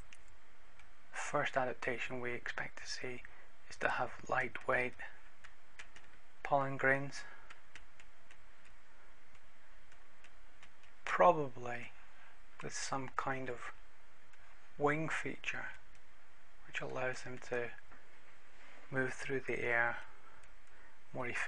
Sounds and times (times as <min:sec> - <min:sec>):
Speech: 0:01.2 - 0:05.2, 0:06.4 - 0:07.4, 0:11.0 - 0:12.0, 0:12.6 - 0:13.8, 0:14.8 - 0:15.8, 0:16.6 - 0:17.8, 0:18.9 - 0:20.1, 0:21.1 - 0:21.4.